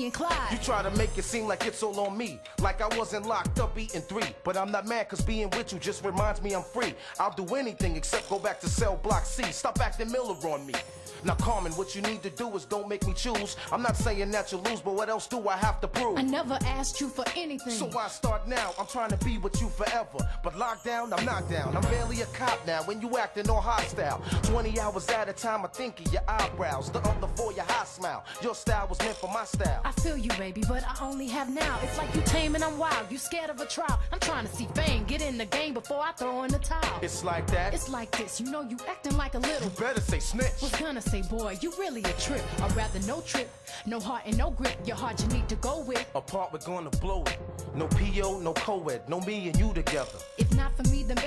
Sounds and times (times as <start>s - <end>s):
Music: 0.0s - 51.2s
Rapping: 0.0s - 51.2s.